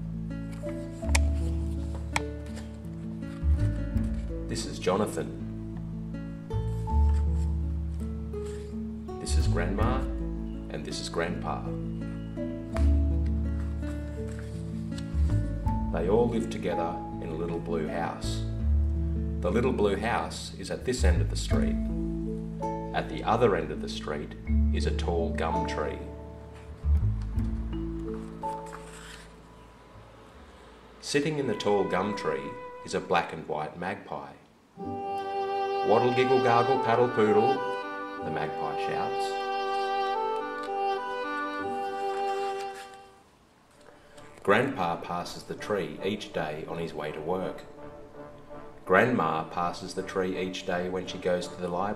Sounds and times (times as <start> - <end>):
Music: 0.0 - 33.7, 34.8 - 51.9
Speech: 4.5 - 5.4, 9.2 - 10.1, 10.7 - 11.7, 15.9 - 18.5, 19.4 - 21.8, 22.9 - 26.1, 31.0 - 34.4, 35.9 - 37.6, 38.2 - 39.4, 44.4 - 47.7, 48.9 - 51.9.